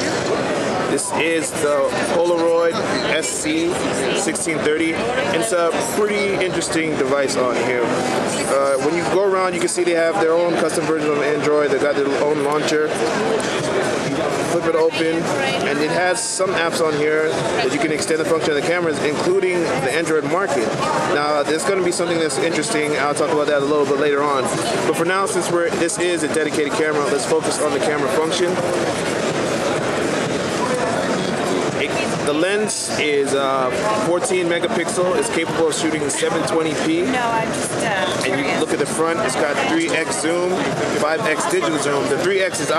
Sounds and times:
Speech: 0:00.9 - 0:13.0, 0:14.4 - 0:28.6, 0:31.8 - 0:42.7.

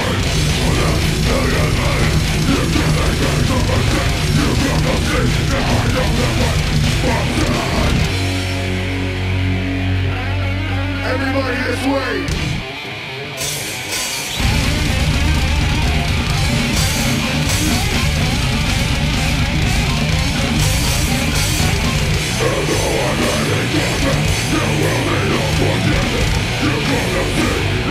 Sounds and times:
Music: 0:00.0 - 0:27.9
Speech: 0:11.0 - 0:12.4.

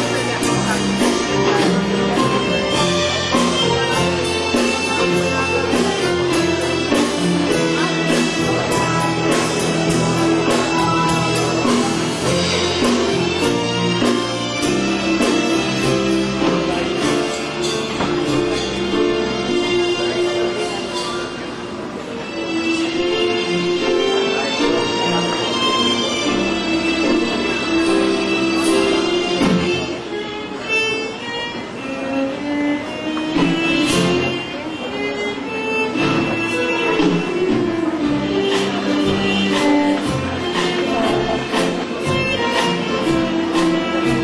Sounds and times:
Tender music: 0:00.0 - 0:21.5
Speech: 0:00.0 - 0:44.2.

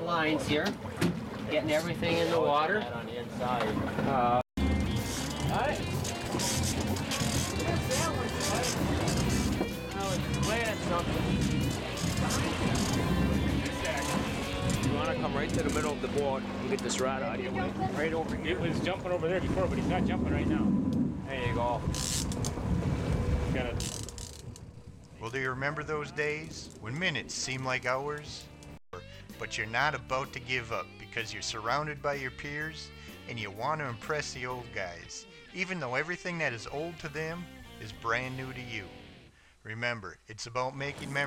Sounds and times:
Speech: 0:14.9 - 0:20.7, 0:25.2 - 0:28.5, 0:29.4 - 0:38.9, 0:39.7 - 0:41.2.

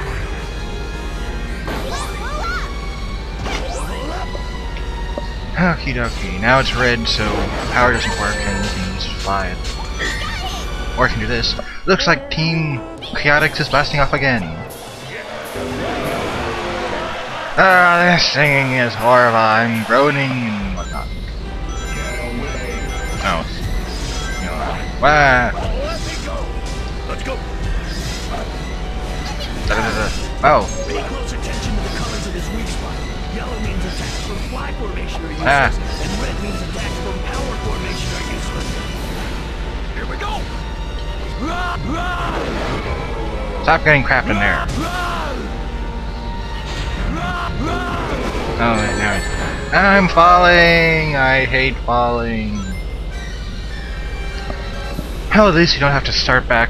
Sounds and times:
Music: 0:00.0 - 0:56.7
Speech: 0:05.6 - 0:09.6, 0:17.6 - 0:21.0, 0:55.3 - 0:56.7.

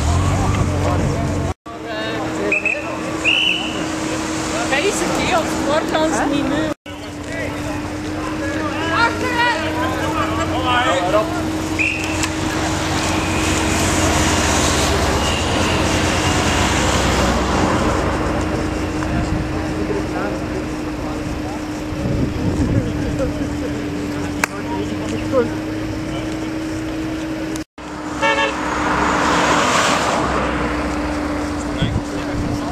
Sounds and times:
Car: 0:00.0 - 0:32.7.

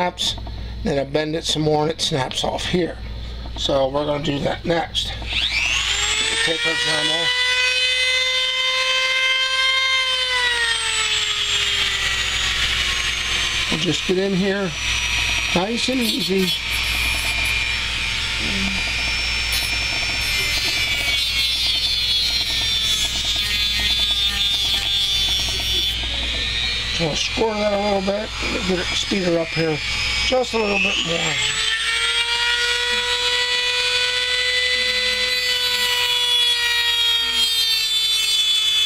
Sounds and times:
Speech: 0:03.6 - 0:05.2, 0:06.4 - 0:07.3, 0:13.7 - 0:14.8, 0:15.6 - 0:16.6, 0:27.0 - 0:31.6.

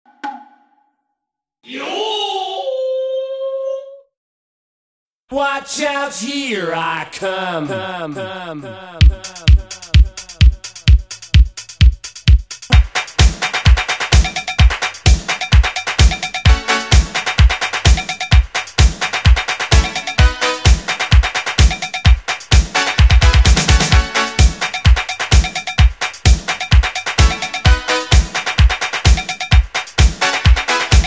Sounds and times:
Music: 0:09.0 - 0:31.0.

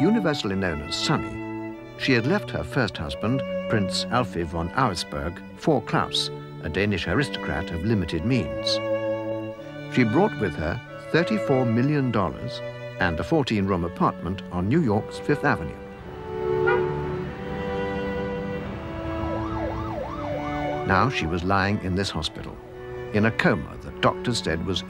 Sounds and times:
Speech: 0:00.0 - 0:01.4, 0:02.0 - 0:08.8, 0:09.9 - 0:15.8, 0:20.9 - 0:24.8
Cello: 0:00.0 - 0:24.8.

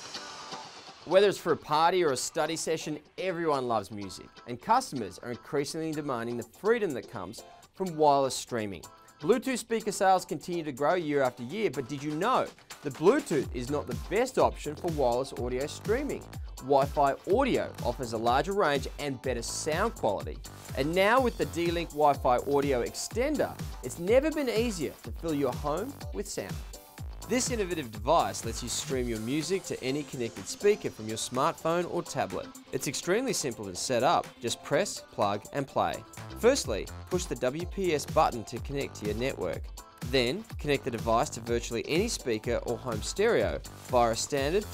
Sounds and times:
Speech: 0:01.1 - 0:26.6, 0:27.3 - 0:44.7.

